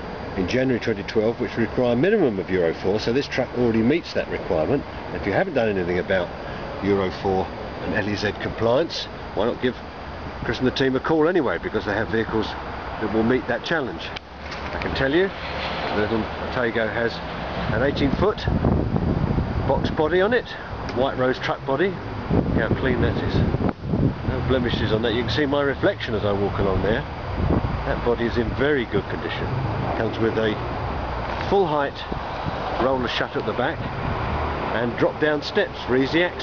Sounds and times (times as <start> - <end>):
Speech: 0.4 - 9.8, 10.4 - 14.2, 14.8 - 18.6, 19.7 - 23.5, 24.3 - 27.1, 27.8 - 30.6, 31.4 - 32.2, 32.8 - 33.9, 34.7 - 36.4.